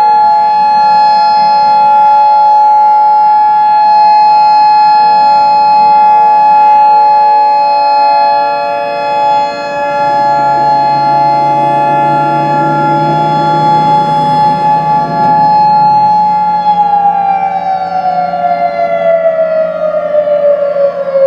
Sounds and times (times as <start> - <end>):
Civil defense siren: 0.0 - 21.2.